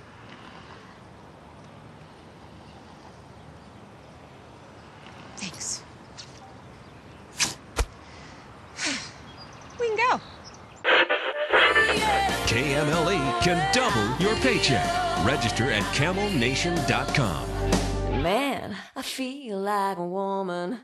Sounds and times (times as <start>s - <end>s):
Music: 11.6s - 18.3s.